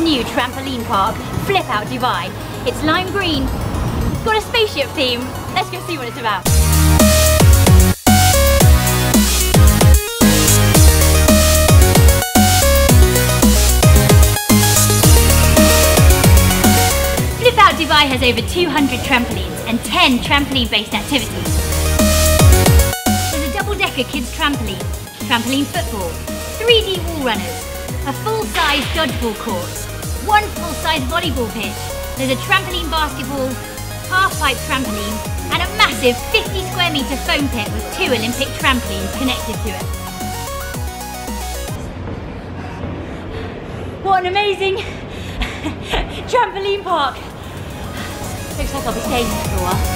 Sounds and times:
Speech: 0.0s - 3.5s, 4.2s - 6.5s, 17.4s - 21.5s, 23.4s - 39.8s, 46.3s - 47.3s, 48.6s - 49.9s
Music: 0.0s - 44.0s, 46.5s - 49.9s.

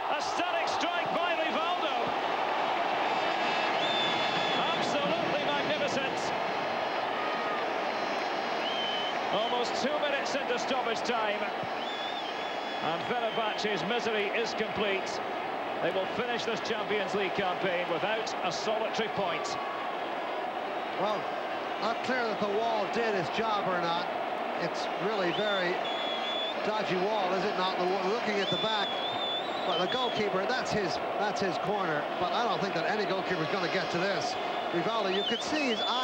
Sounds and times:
Speech: 0.1s - 2.1s, 4.6s - 6.3s, 9.4s - 11.5s, 12.8s - 15.2s, 15.8s - 19.6s, 21.8s - 25.8s, 26.6s - 28.9s, 29.7s - 36.0s.

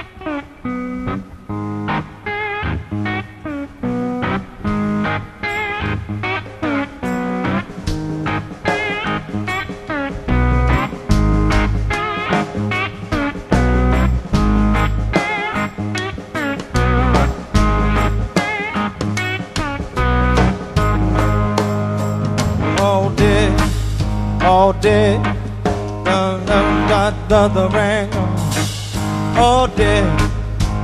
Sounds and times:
Bass guitar: 0.0s - 30.8s.

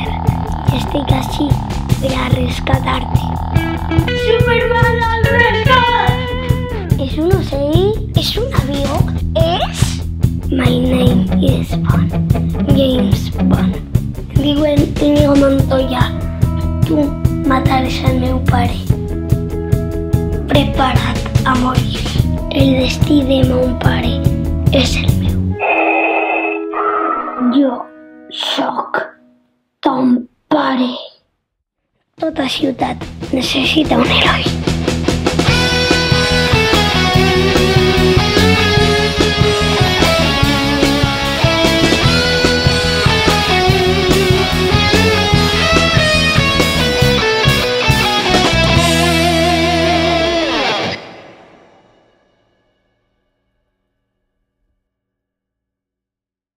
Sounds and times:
Speech: 0.0s - 3.4s, 4.2s - 6.2s, 6.9s - 16.1s, 16.8s - 18.9s, 20.5s - 25.4s, 27.4s - 29.2s, 29.8s - 31.2s, 32.2s - 34.6s
Music: 0.0s - 29.7s, 32.2s - 54.1s.

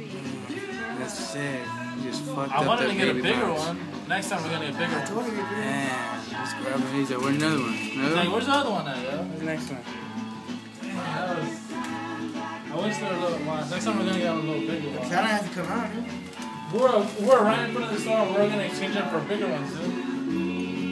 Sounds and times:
Music: 0.0s - 20.9s
Speech: 0.2s - 9.9s.

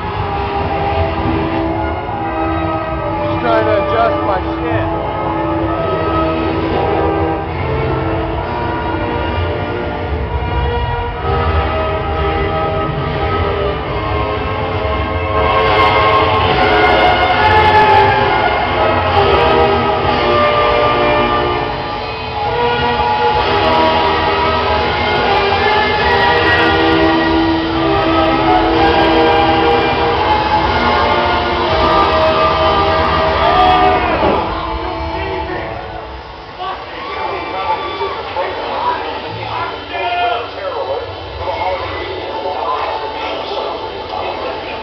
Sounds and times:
Music: 0.0s - 44.8s.

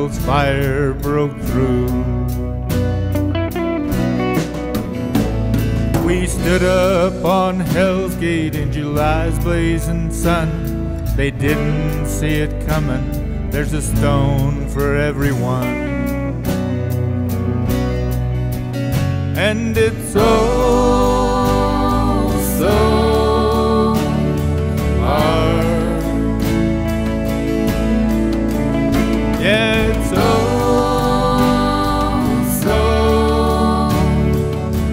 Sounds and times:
Steel guitar, slide guitar: 0.0s - 34.9s.

